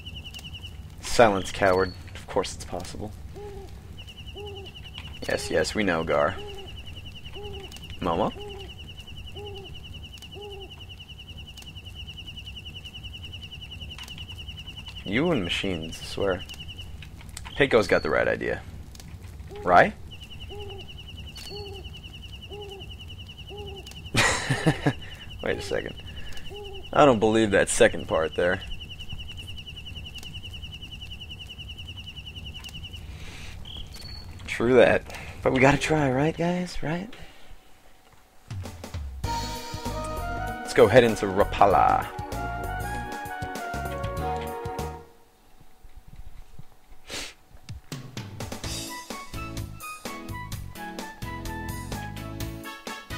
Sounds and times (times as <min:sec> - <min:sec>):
Speech: 0:05.2 - 0:06.4, 0:25.4 - 0:26.0, 0:34.5 - 0:37.2, 0:40.7 - 0:42.1.